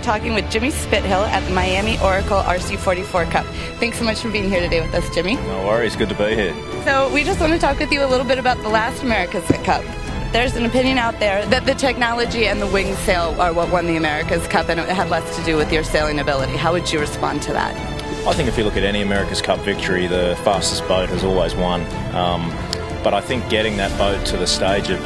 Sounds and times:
Speech: 0.0 - 9.8, 18.3 - 25.0
Music: 0.0 - 25.0.

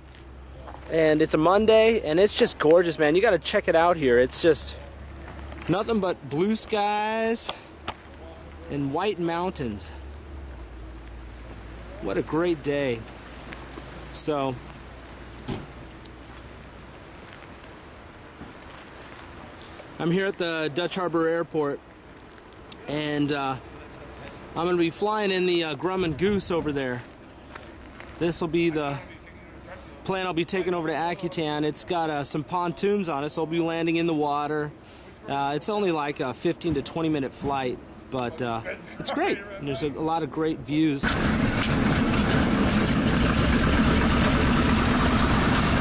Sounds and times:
Speech: 0.6 - 5.0, 5.7 - 10.0, 11.9 - 13.1, 14.1 - 14.6, 20.0 - 21.8, 22.8 - 27.1, 28.2 - 41.1.

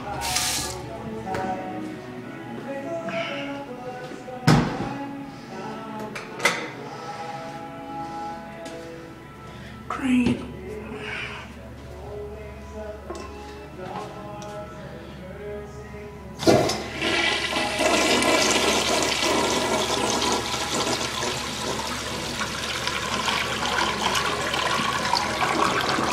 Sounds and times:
Music: 0.0 - 26.1
Speech: 9.9 - 10.5
Toilet flush: 16.4 - 26.1.

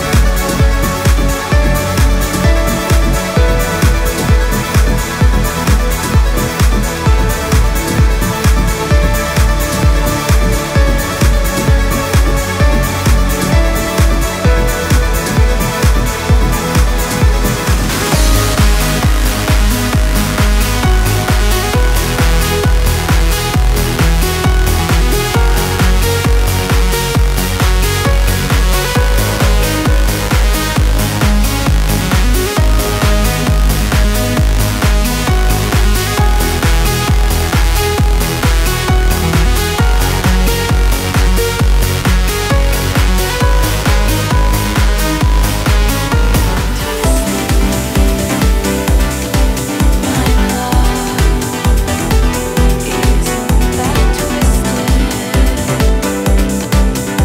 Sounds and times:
Trance music: 0.0 - 57.2.

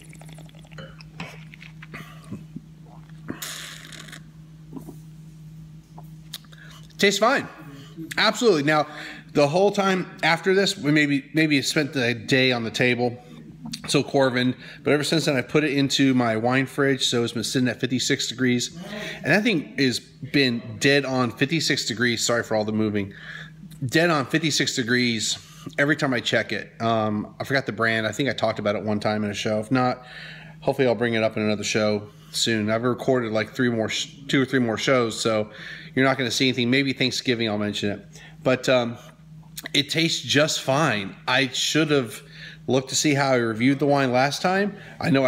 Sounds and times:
Inside, small room: 0.0 - 45.2
Speech: 7.0 - 13.2, 13.8 - 23.1, 23.8 - 30.0, 30.6 - 39.0, 39.6 - 45.2.

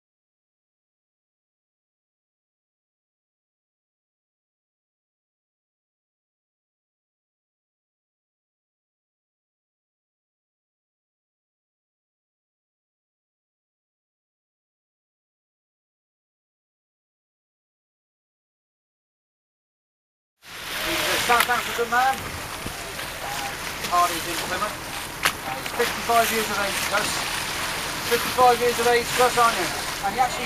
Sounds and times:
Sailboat, sailing ship: 20.4 - 30.4
Speech: 20.8 - 22.2, 22.8 - 24.8, 25.4 - 27.2, 28.1 - 30.4.

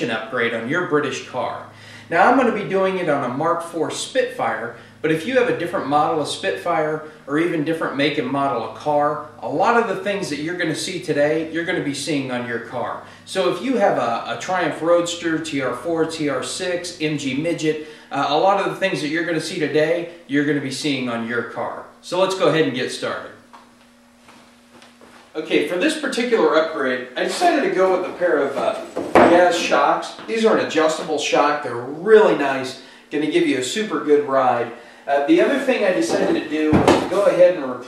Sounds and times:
Speech: 0.0 - 23.4, 25.4 - 37.8.

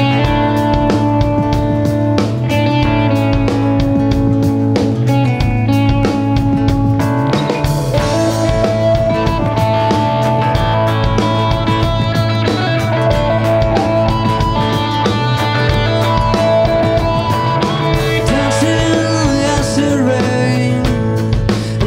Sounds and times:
Music: 0.0 - 21.8.

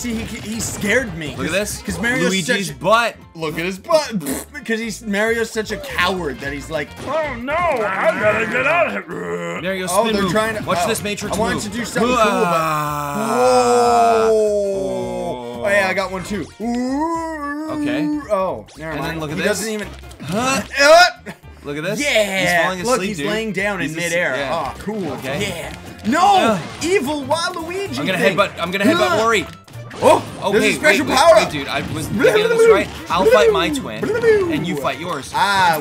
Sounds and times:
Music: 0.0 - 35.8.

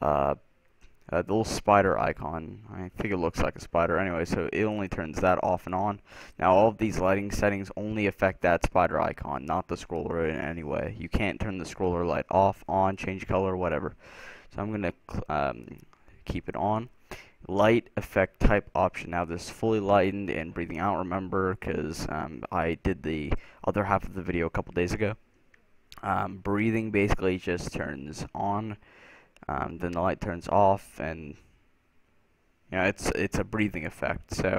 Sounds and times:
Speech: 0.0 - 0.5, 1.1 - 25.2, 26.0 - 28.8, 29.4 - 31.5, 32.7 - 34.5.

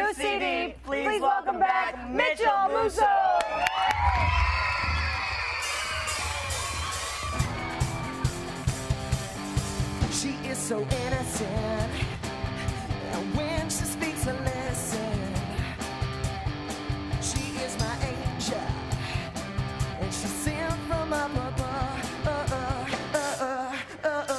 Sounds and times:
Music: 4.8 - 24.3.

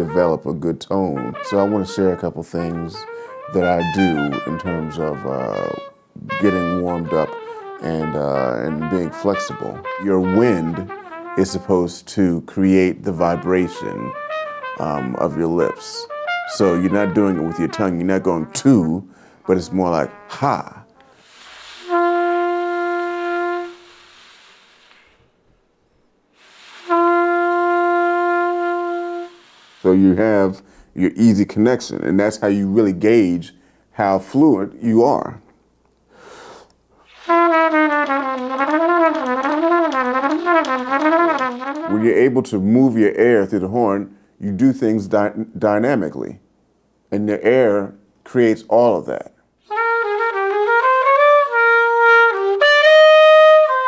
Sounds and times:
Speech: 0.0 - 14.2, 14.8 - 20.8, 29.9 - 35.4, 41.9 - 46.4, 47.1 - 49.4
Trumpet: 0.0 - 25.4, 26.3 - 33.1, 37.0 - 43.9, 49.1 - 53.8.

